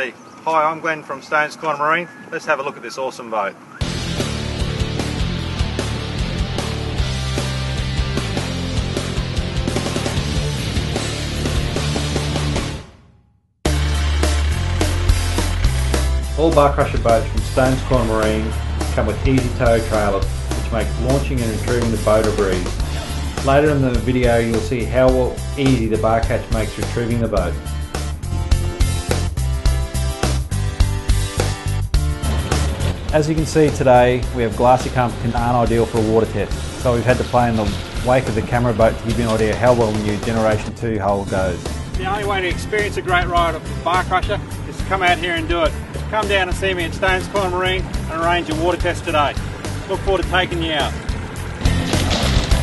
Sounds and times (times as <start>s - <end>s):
Speech: 0.0s - 3.6s, 16.4s - 22.7s, 23.4s - 27.6s, 33.1s - 51.0s
Music: 3.8s - 52.6s.